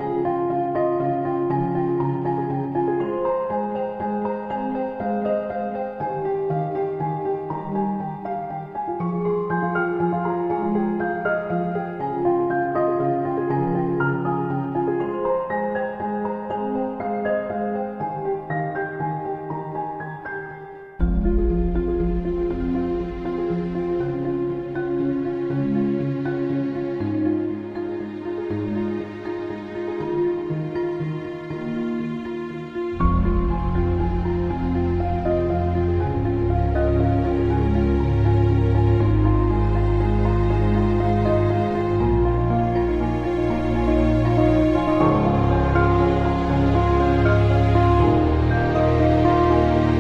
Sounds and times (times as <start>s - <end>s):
Music: 0.0s - 50.0s.